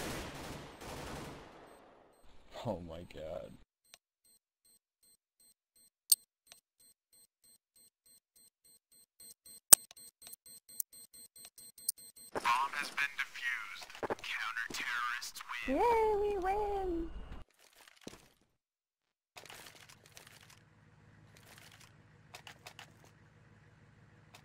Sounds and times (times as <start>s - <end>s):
Speech: 2.5s - 3.6s, 12.4s - 17.1s.